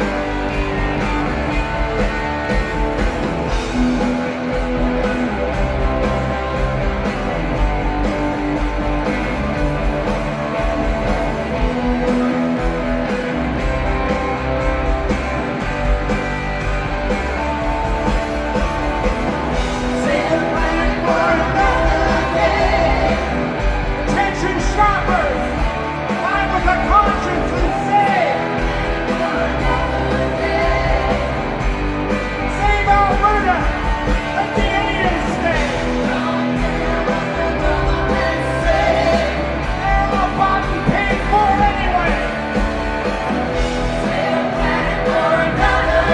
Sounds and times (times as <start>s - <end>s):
Music: 0.0s - 46.1s.